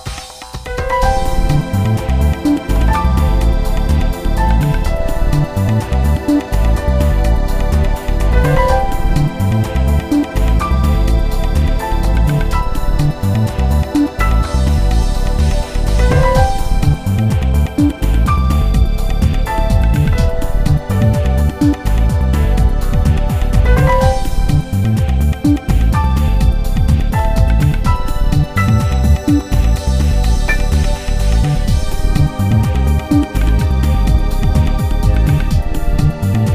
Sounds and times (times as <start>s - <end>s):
Soul music: 0.0s - 36.5s
Soundtrack music: 0.0s - 36.5s.